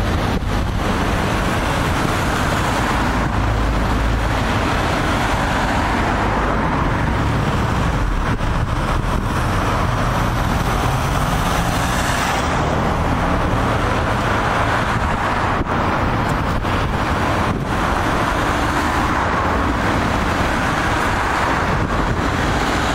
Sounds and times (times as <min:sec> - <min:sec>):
Car: 0:00.0 - 0:22.9.